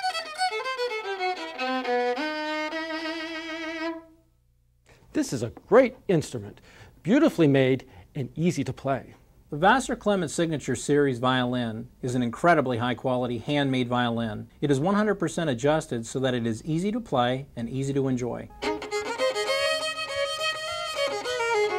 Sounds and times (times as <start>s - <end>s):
Violin, fiddle: 0.0s - 4.2s, 18.5s - 21.7s
Speech: 5.1s - 18.5s.